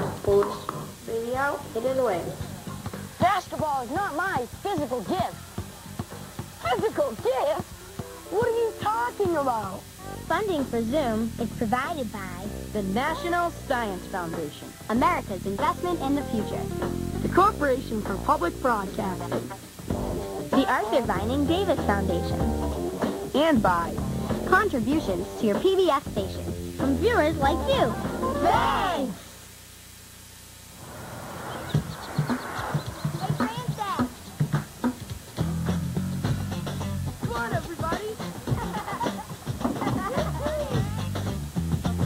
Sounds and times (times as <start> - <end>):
Speech: 0.0 - 2.4, 3.2 - 5.4, 6.6 - 7.7, 8.3 - 19.4, 20.5 - 22.4, 23.3 - 29.2, 33.2 - 34.1, 37.2 - 38.3
Music: 0.0 - 29.3, 33.1 - 42.0.